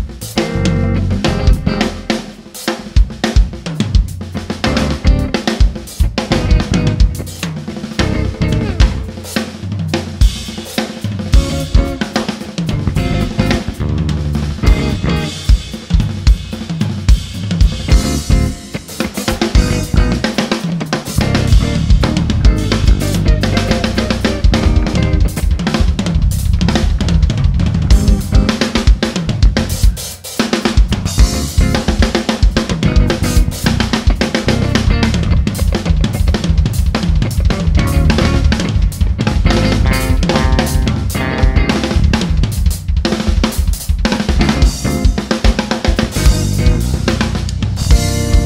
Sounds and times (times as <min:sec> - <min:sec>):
Bass drum: 0:00.0 - 0:02.3, 0:03.0 - 0:10.6, 0:11.3 - 0:12.1, 0:12.7 - 0:20.4, 0:21.1 - 0:30.0, 0:30.8 - 0:48.4
Bass guitar: 0:00.0 - 0:48.4
Drum kit: 0:00.0 - 0:48.4.